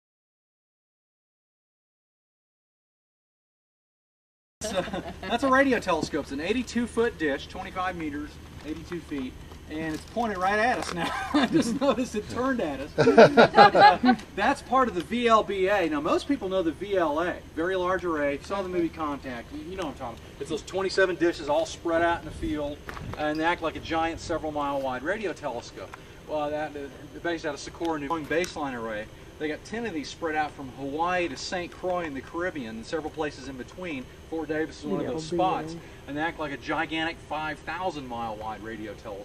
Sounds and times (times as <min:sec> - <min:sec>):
Speech: 0:04.6 - 0:39.2.